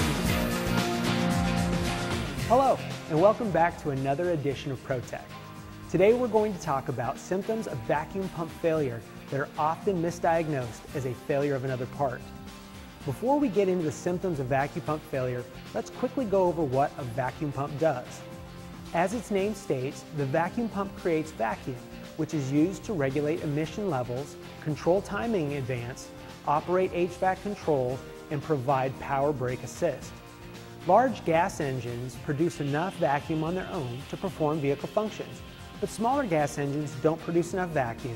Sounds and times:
Music: 0.0s - 38.1s
Speech: 2.5s - 5.3s, 5.9s - 12.2s, 13.0s - 18.2s, 18.9s - 30.1s, 30.8s - 38.1s.

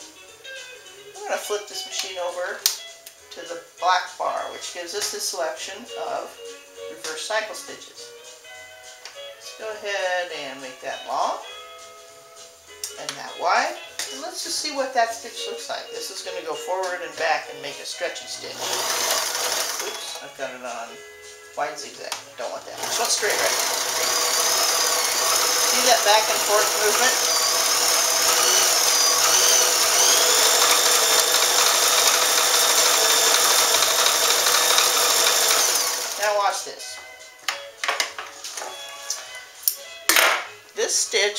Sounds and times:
Music: 0.0s - 41.3s
Speech: 1.2s - 2.6s, 3.3s - 8.1s, 9.6s - 11.4s, 12.9s - 18.6s, 19.8s - 21.0s, 21.6s - 23.6s, 25.7s - 27.2s, 36.2s - 37.0s, 40.8s - 41.3s
Sewing machine: 18.6s - 20.2s, 22.8s - 36.3s.

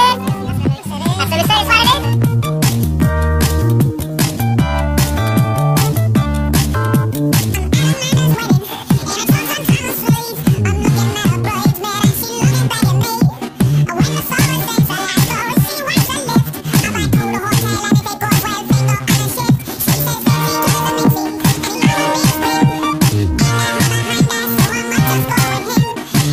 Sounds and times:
Music: 0.0s - 26.3s.

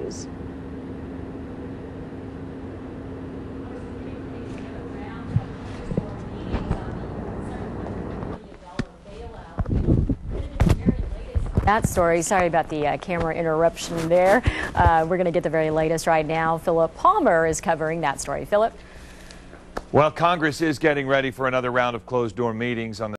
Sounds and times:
Speech: 3.7s - 9.7s, 10.4s - 18.7s, 20.0s - 23.1s.

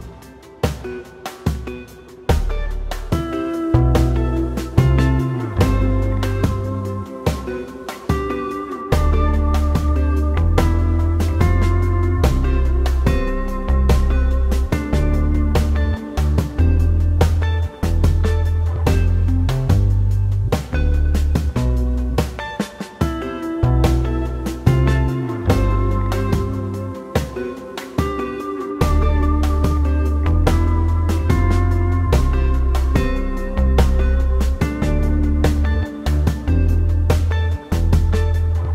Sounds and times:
Strum: 0.0s - 38.7s.

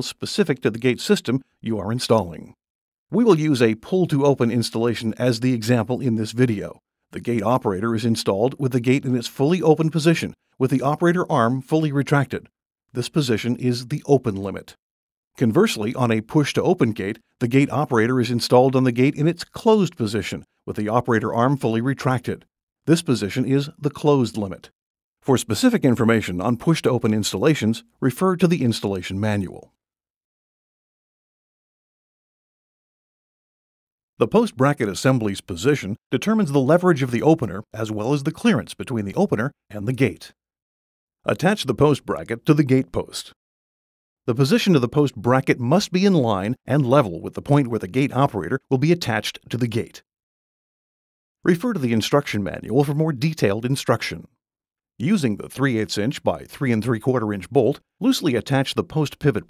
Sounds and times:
Speech: 0.0s - 14.8s, 15.4s - 29.8s, 34.2s - 40.4s, 41.3s - 43.4s, 44.3s - 50.1s, 51.5s - 54.4s, 55.0s - 59.5s.

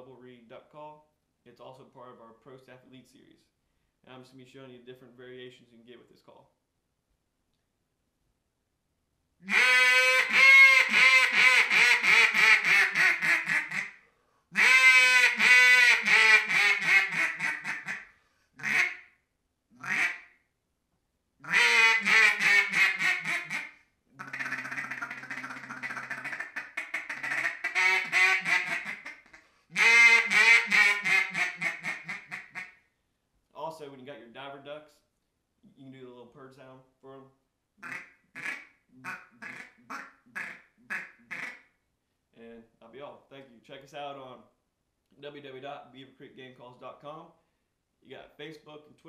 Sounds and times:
Quack: 9.5s - 14.0s, 14.6s - 19.1s, 19.8s - 20.3s, 21.4s - 32.8s, 37.8s - 41.6s.

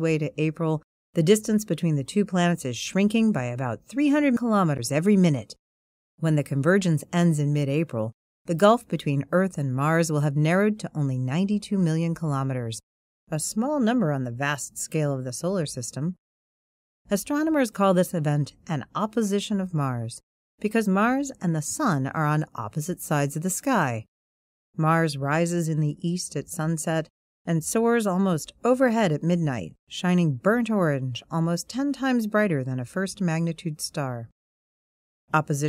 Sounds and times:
Narration, monologue: 0.0s - 5.6s, 6.2s - 16.2s, 17.0s - 24.1s, 24.7s - 34.4s, 35.3s - 35.6s.

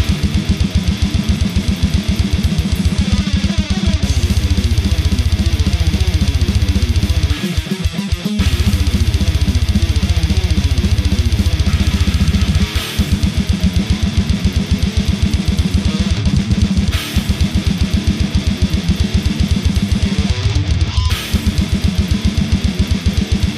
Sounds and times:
Bass drum: 0.0s - 23.5s
Drum kit: 0.0s - 23.5s.

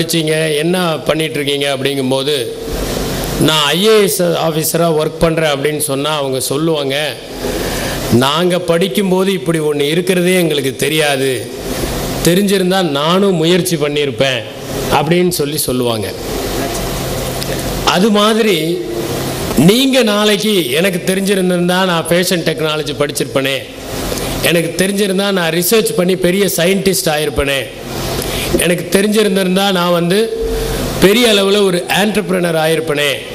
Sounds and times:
Male speech, man speaking: 0.0s - 2.6s, 3.4s - 7.2s, 8.2s - 11.5s, 12.3s - 16.2s, 17.9s - 18.8s, 19.6s - 23.7s, 24.4s - 27.8s, 28.6s - 30.4s, 31.0s - 33.3s
Narration, monologue: 0.0s - 33.3s.

